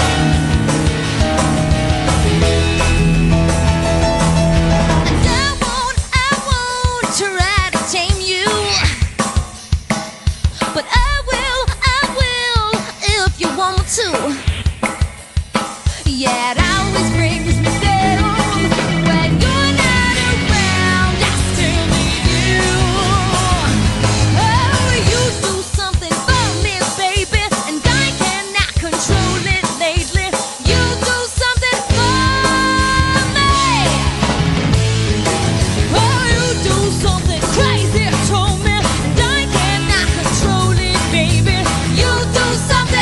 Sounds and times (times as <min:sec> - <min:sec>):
Rock music: 0:00.0 - 0:43.0.